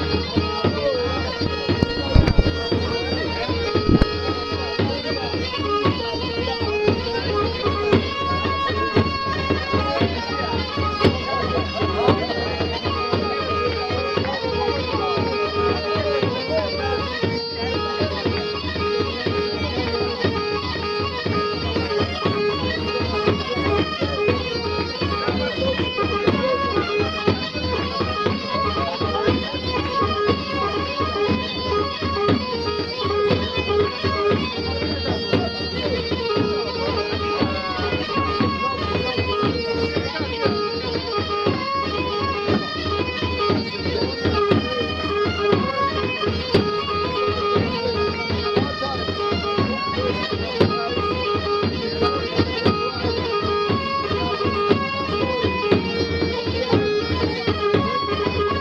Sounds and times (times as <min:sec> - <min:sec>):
Music: 0:00.0 - 0:58.6
Speech: 0:00.0 - 0:58.6.